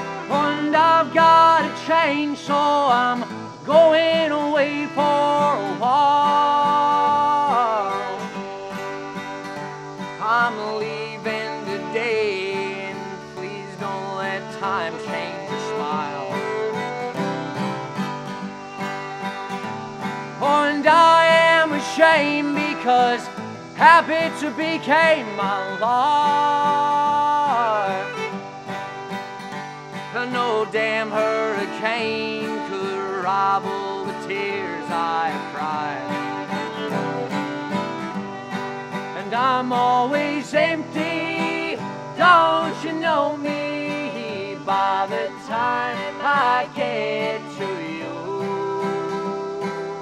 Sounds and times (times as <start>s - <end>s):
Music: 0.0s - 50.0s.